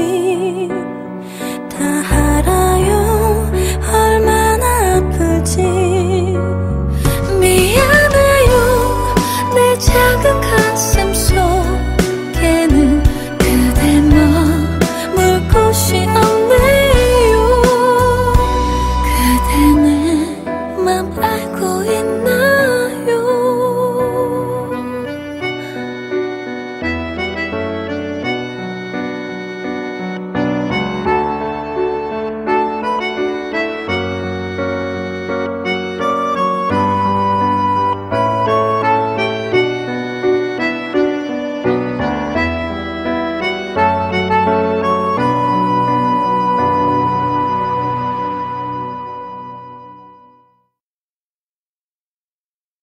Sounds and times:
Background music: 0:00.0 - 0:50.5.

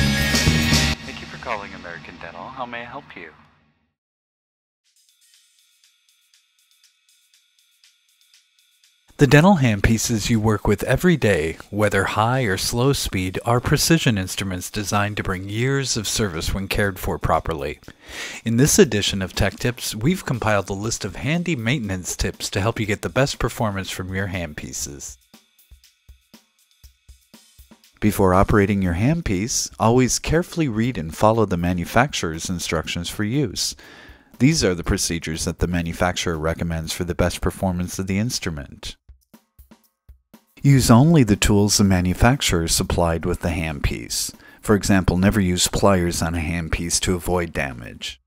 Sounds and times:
Music: 0:00.0 - 0:04.0, 0:04.8 - 0:48.2
Speech: 0:01.0 - 0:03.4, 0:09.2 - 0:25.2, 0:28.0 - 0:33.8, 0:34.4 - 0:39.0, 0:40.6 - 0:48.2.

